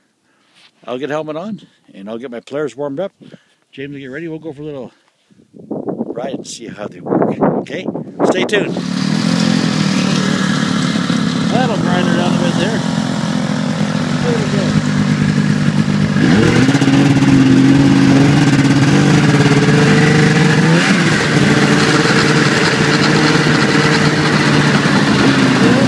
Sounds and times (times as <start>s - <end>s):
Outside, rural or natural: 0.0s - 25.8s
Speech: 0.8s - 5.0s, 6.1s - 8.8s, 11.5s - 12.8s, 14.2s - 14.8s
Vehicle: 8.6s - 25.8s.